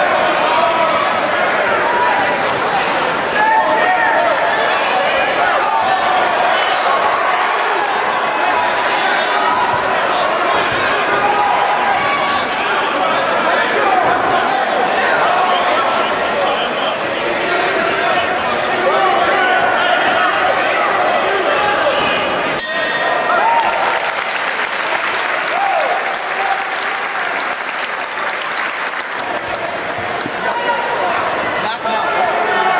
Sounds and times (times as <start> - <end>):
Applause: 23.3 - 30.7.